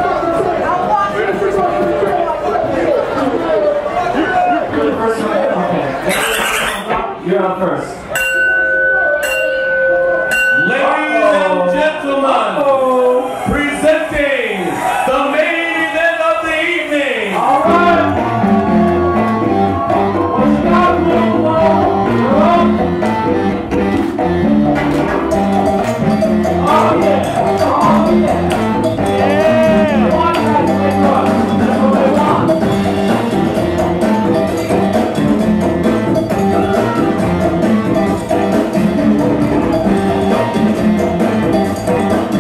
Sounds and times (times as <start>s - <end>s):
Chatter: 0.0s - 7.2s, 25.4s - 39.0s
Crowd: 0.0s - 42.4s
Music: 8.1s - 11.9s, 17.4s - 42.4s
Speech: 10.6s - 18.2s.